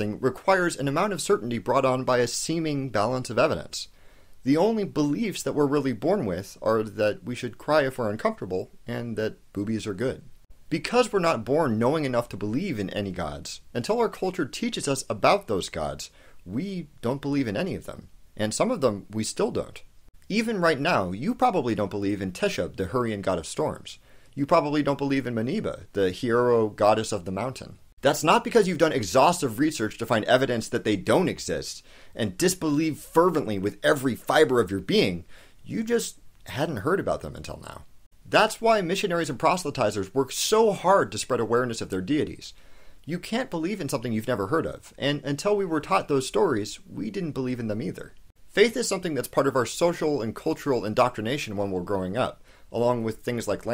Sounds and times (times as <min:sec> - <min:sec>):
Speech: 0:00.0 - 0:53.7.